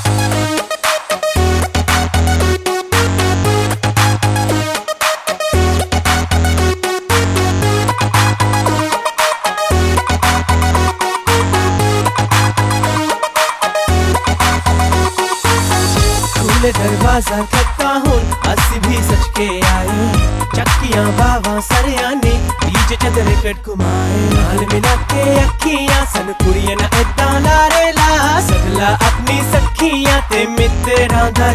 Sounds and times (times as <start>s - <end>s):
Music: 0.0s - 31.5s.